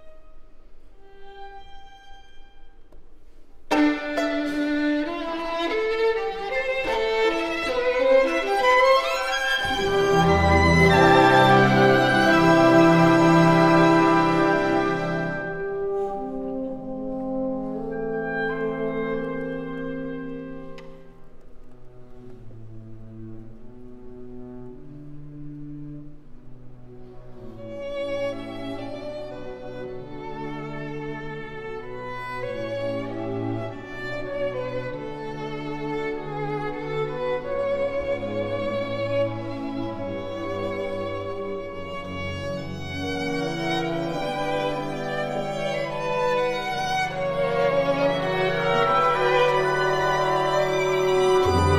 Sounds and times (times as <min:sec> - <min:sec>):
Violin, fiddle: 0:00.0 - 0:03.1, 0:03.7 - 0:16.1, 0:23.4 - 0:51.7
Classical music: 0:00.0 - 0:51.7.